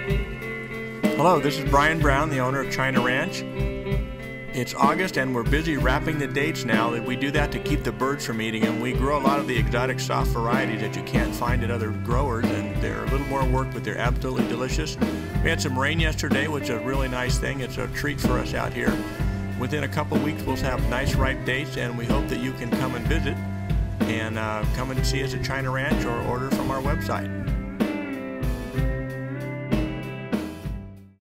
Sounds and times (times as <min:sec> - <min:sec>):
Music: 0:00.0 - 0:31.2
Speech: 0:01.2 - 0:03.4, 0:04.6 - 0:19.0, 0:19.6 - 0:23.4, 0:24.0 - 0:27.4.